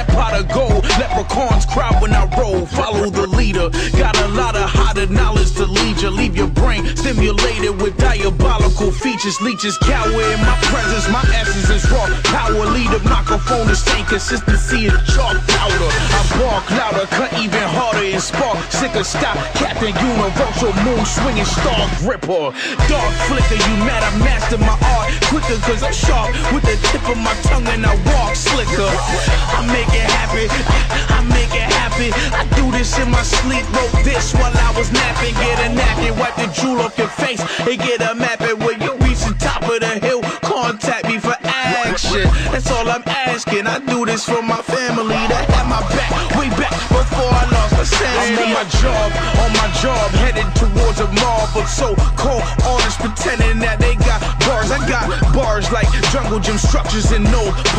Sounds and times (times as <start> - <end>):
Music: 0.0 - 57.7.